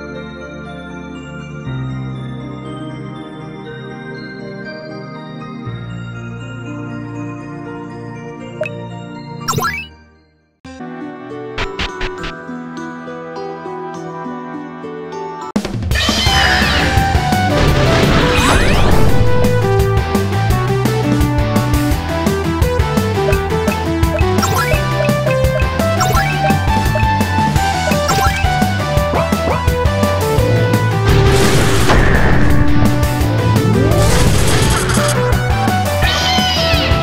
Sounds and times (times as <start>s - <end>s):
Music: 0.0s - 37.0s.